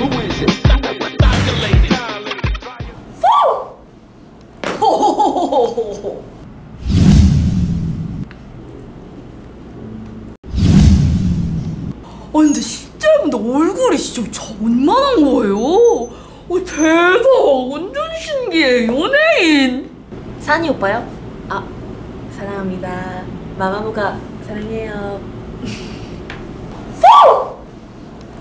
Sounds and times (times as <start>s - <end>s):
Speech: 12.3s - 21.7s, 22.4s - 25.2s.